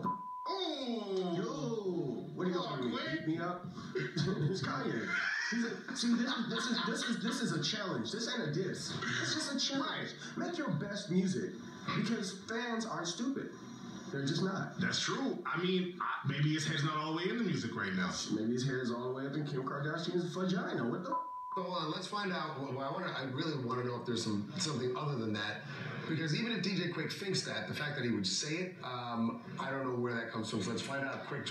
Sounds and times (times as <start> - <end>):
Speech: 0.0 - 31.5.